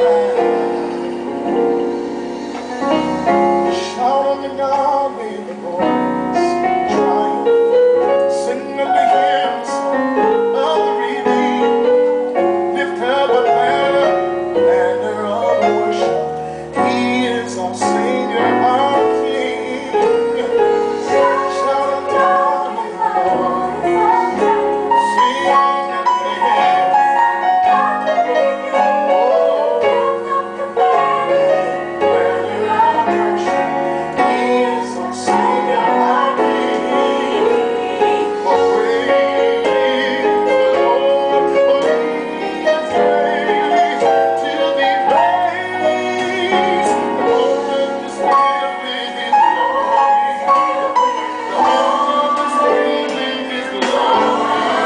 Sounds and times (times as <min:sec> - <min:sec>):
Music: 0:00.0 - 0:54.8.